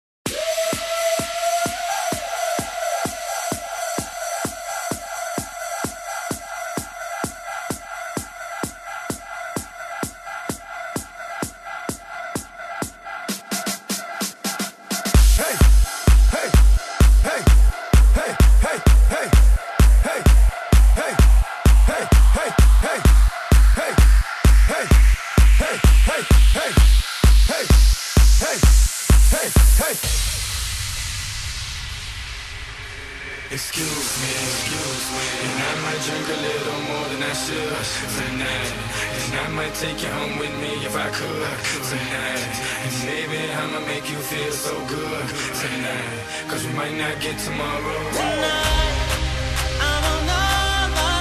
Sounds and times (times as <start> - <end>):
House music: 0.2 - 51.2.